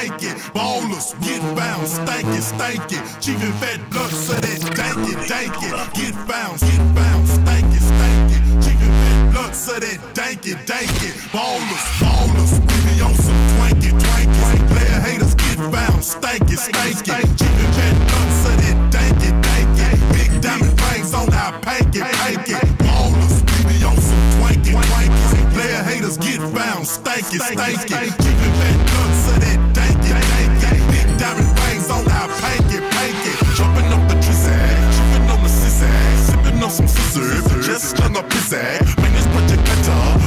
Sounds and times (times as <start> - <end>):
Dubstep: 0.0 - 40.2.